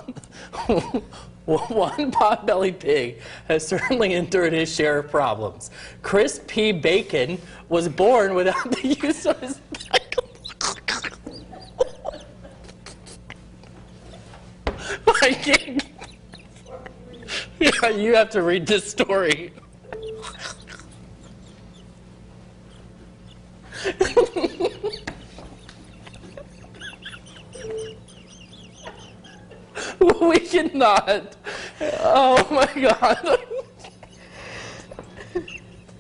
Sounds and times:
Speech: 1.5 - 9.6, 17.6 - 19.6, 30.0 - 31.4, 32.0 - 33.4.

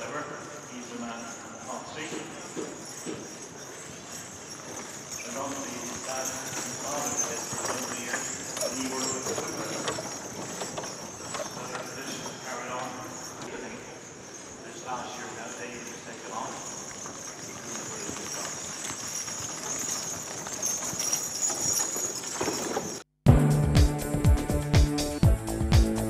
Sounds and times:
Speech: 0.0 - 2.6, 5.2 - 10.0, 11.3 - 14.0, 14.6 - 16.8, 17.5 - 18.5
Clip-clop: 0.0 - 23.1
Music: 23.2 - 26.0.

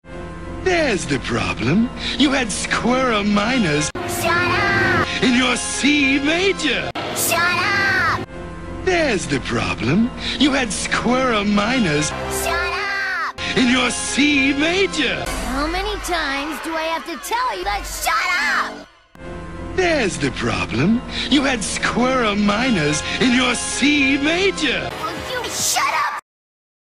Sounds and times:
Music: 0.0 - 26.2
Speech: 19.8 - 26.2.

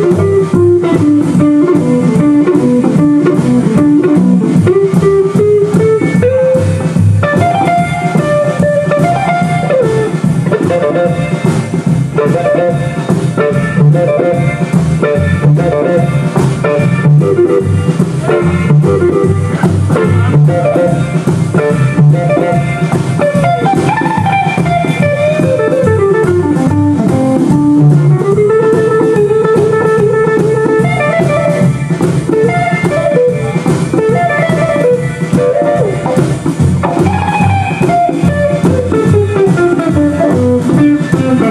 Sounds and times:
Strum: 0.0 - 41.5.

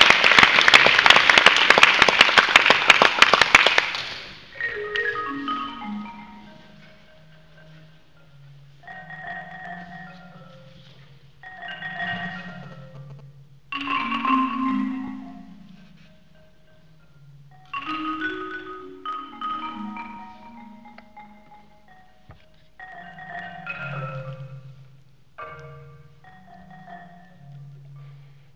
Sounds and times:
Percussion: 0.0 - 28.5.

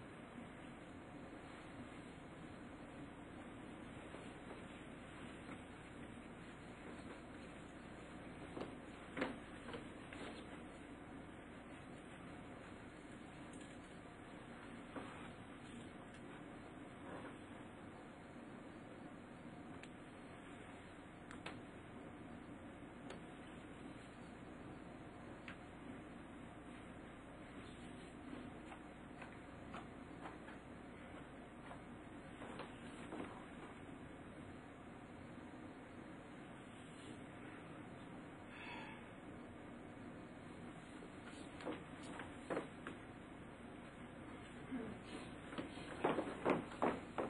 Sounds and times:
Inside, small room: 0.0 - 47.3.

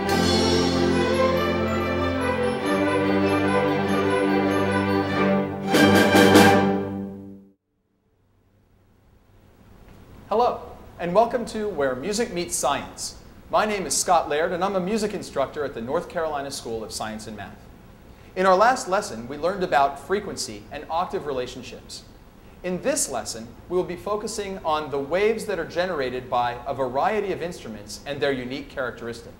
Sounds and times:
Speech: 10.3 - 17.6, 18.4 - 29.3.

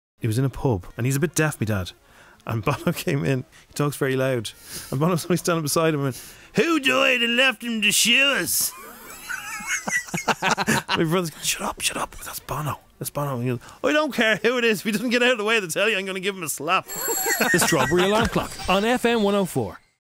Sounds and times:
Speech: 0.2 - 8.8, 10.9 - 16.8, 17.6 - 19.8.

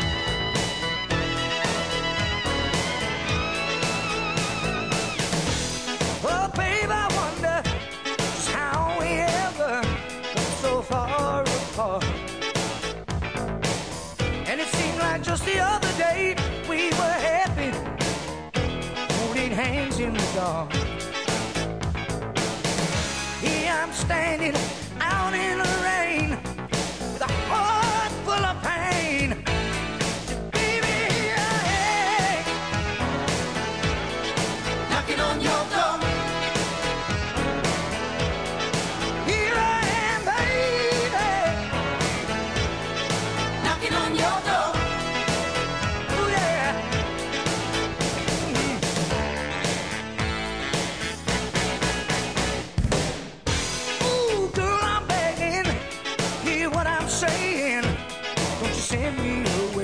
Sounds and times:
Music: 0.0 - 59.8.

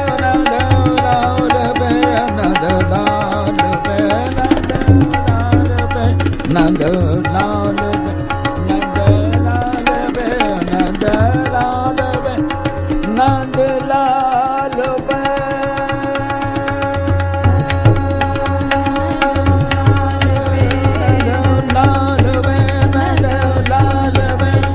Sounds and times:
Carnatic music: 0.0 - 24.7
Tabla: 0.0 - 24.7.

